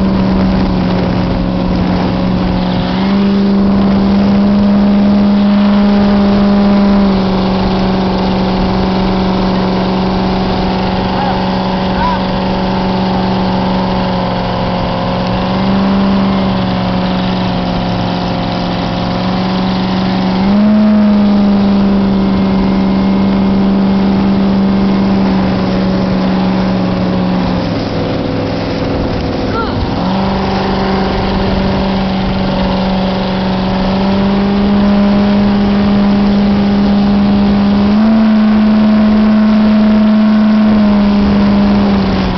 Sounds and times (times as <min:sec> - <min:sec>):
Motorboat, speedboat: 0:00.0 - 0:42.3
Speech: 0:29.5 - 0:29.8.